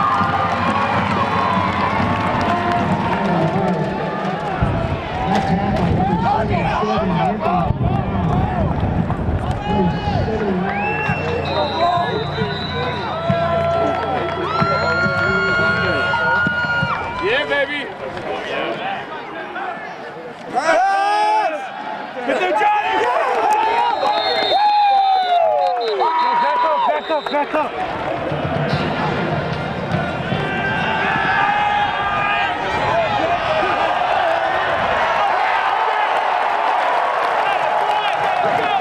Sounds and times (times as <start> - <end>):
Cheering: 0.0 - 38.8
Crowd: 0.0 - 38.8.